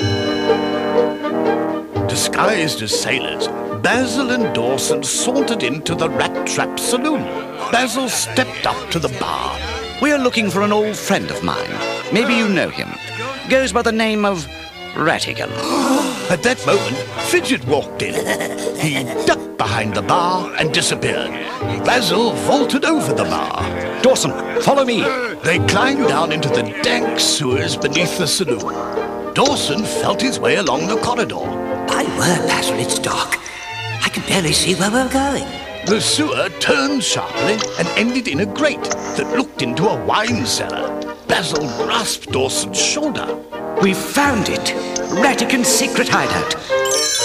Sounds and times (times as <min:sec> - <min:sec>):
Music: 0:00.0 - 0:47.2
Speech: 0:02.1 - 0:28.8, 0:29.4 - 0:46.7.